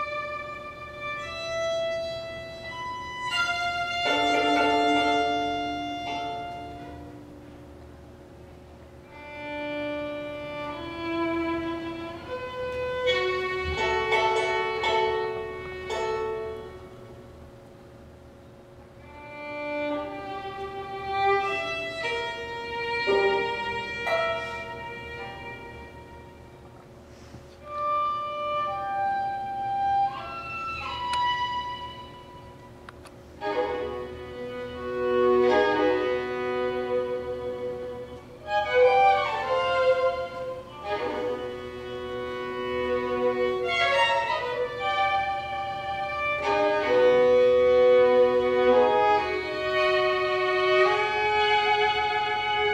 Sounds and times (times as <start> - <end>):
Violin, fiddle: 0.0 - 7.4, 9.0 - 17.0, 19.0 - 26.8, 27.6 - 52.7.